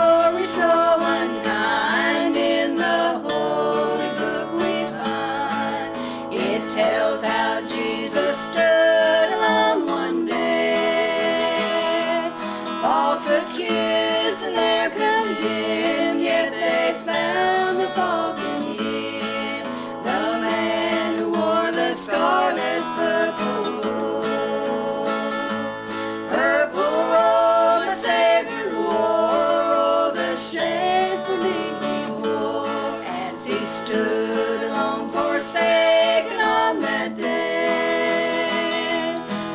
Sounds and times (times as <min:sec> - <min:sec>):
Gospel music: 0:00.0 - 0:39.5.